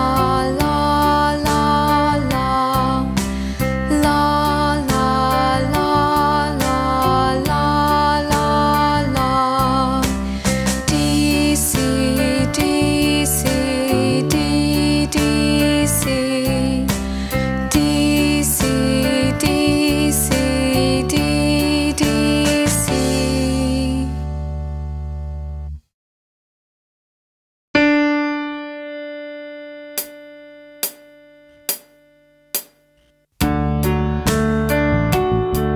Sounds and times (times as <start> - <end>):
Female singing: 0.0 - 3.2, 3.9 - 10.1, 10.9 - 16.9, 17.7 - 24.2
Music: 0.0 - 25.9, 27.8 - 35.7.